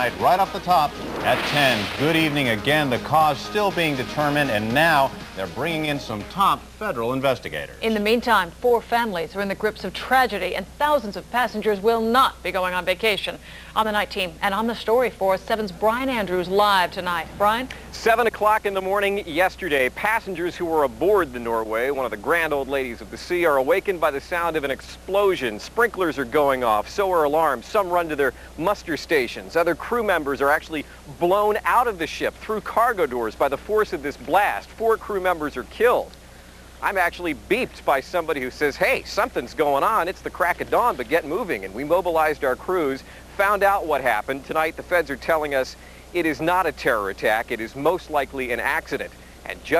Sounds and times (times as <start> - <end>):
Speech: 0.0 - 36.2, 36.8 - 49.8.